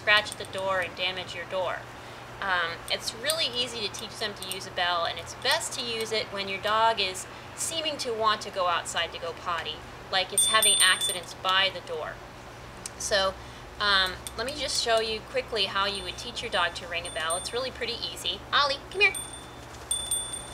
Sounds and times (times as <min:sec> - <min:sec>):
Speech: 0:00.0 - 0:01.8, 0:02.4 - 0:12.2, 0:12.9 - 0:19.2.